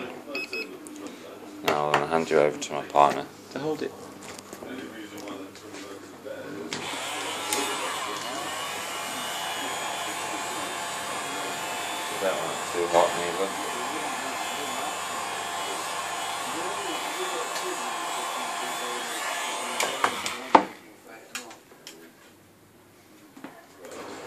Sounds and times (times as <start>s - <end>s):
Speech: 0.0s - 22.3s.